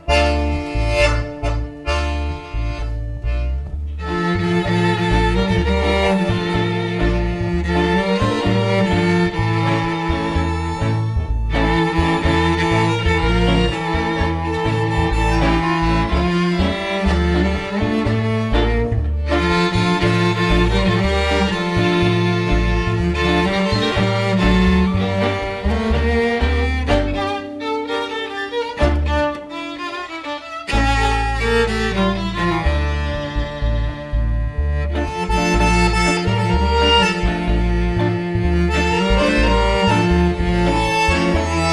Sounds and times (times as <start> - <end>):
Blues: 0.0 - 41.7.